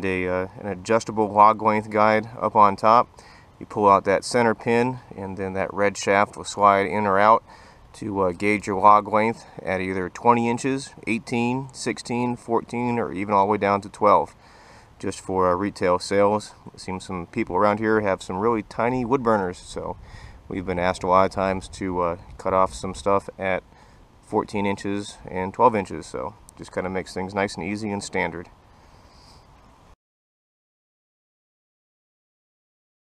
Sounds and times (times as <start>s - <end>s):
Speech: 0.0s - 7.4s, 8.0s - 14.4s, 15.0s - 23.6s, 24.2s - 28.5s.